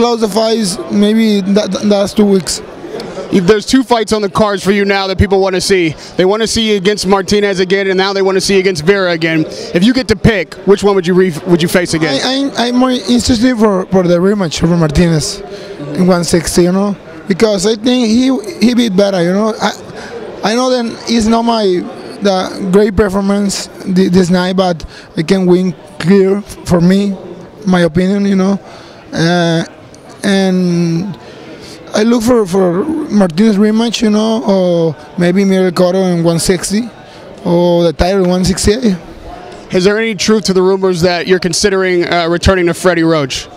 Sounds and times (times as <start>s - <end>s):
Male speech, man speaking: 0.0s - 2.7s, 3.3s - 19.8s, 20.4s - 31.2s, 31.9s - 39.0s, 39.7s - 43.5s.